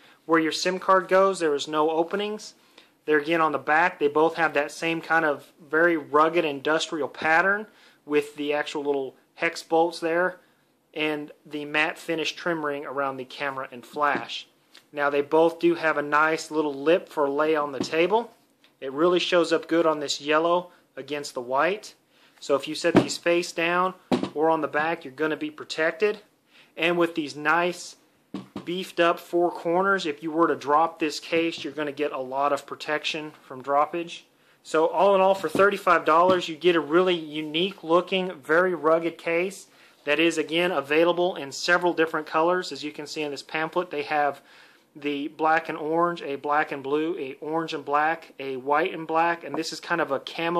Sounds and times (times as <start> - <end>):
Speech: 0.3 - 28.0, 28.6 - 44.4, 45.0 - 50.5.